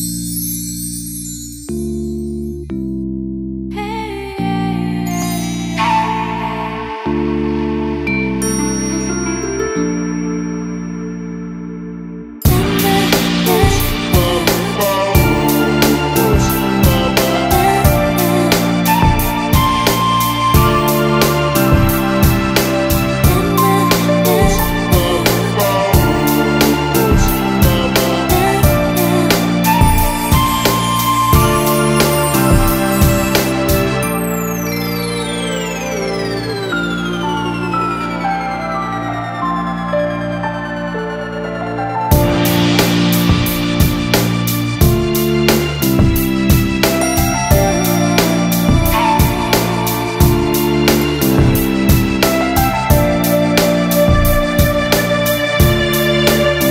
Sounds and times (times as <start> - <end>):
Music: 0.0 - 56.7.